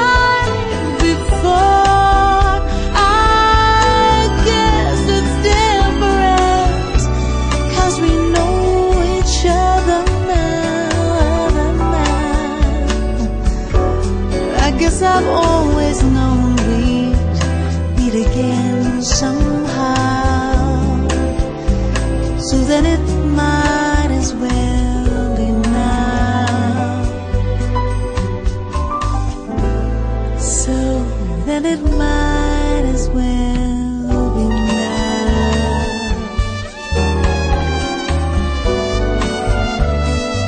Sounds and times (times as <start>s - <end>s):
Soul music: 0.0s - 40.4s.